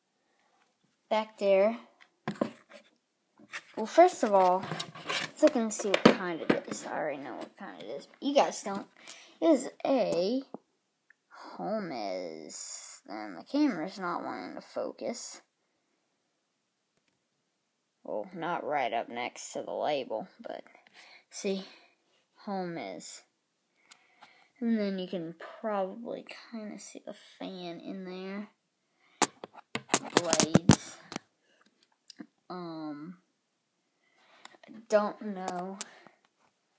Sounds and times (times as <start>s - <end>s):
Speech: 1.1s - 1.9s, 3.8s - 10.6s, 11.4s - 15.5s, 18.0s - 23.3s, 24.6s - 28.6s, 30.0s - 31.2s, 32.1s - 33.2s, 34.6s - 36.0s.